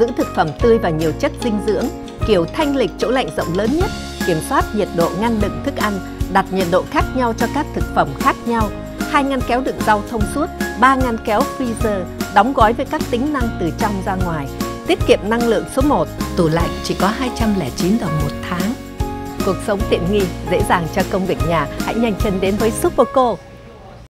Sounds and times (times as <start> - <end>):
Speech: 0.0 - 18.8, 19.4 - 24.0
Music: 0.0 - 24.0.